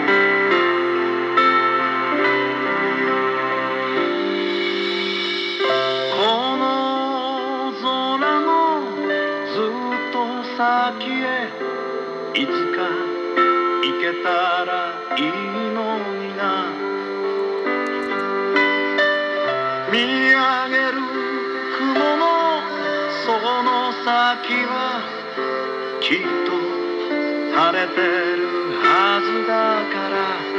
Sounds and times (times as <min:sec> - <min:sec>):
Music: 0:00.0 - 0:30.5.